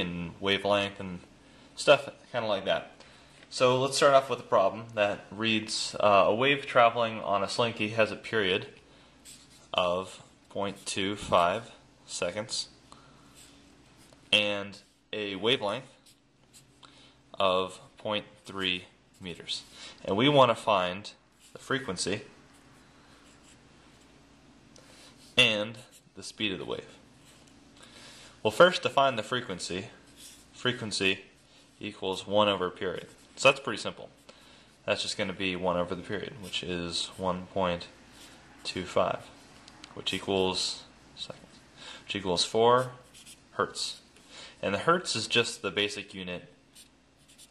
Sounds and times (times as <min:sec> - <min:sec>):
Speech: 0:00.0 - 0:08.8, 0:09.7 - 0:12.8, 0:14.3 - 0:16.0, 0:17.4 - 0:22.4, 0:25.4 - 0:27.0, 0:28.4 - 0:30.0, 0:30.6 - 0:34.2, 0:34.8 - 0:38.0, 0:38.6 - 0:39.3, 0:40.0 - 0:44.0, 0:44.6 - 0:46.6.